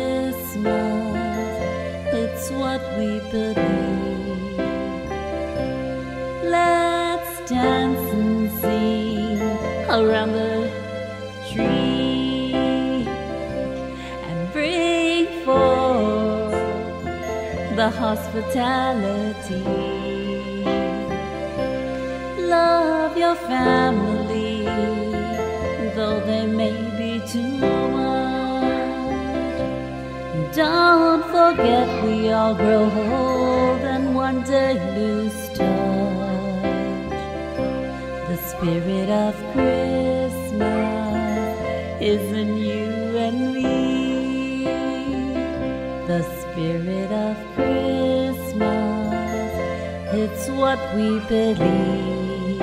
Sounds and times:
Christian music: 0.0 - 52.6
Christmas music: 0.0 - 52.6.

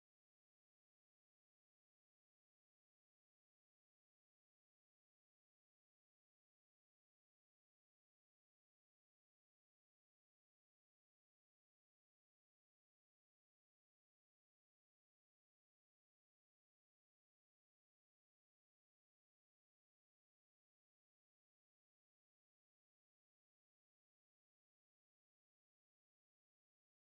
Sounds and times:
Silence: 0.0 - 27.1.

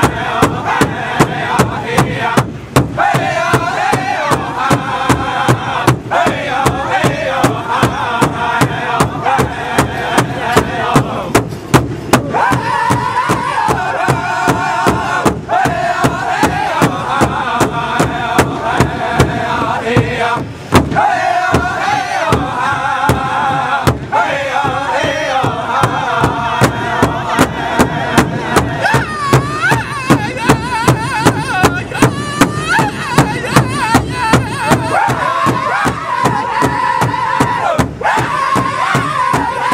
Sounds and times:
Music: 0.0 - 39.7.

